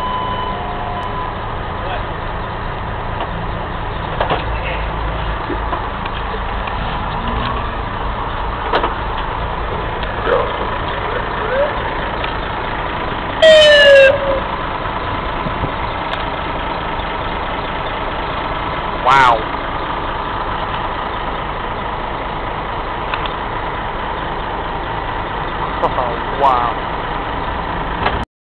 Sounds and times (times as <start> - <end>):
Idling: 0.0 - 28.2
Medium engine (mid frequency): 0.0 - 28.3
Vehicle: 0.0 - 28.3
Speech: 4.5 - 5.0, 19.0 - 19.4, 25.8 - 26.8.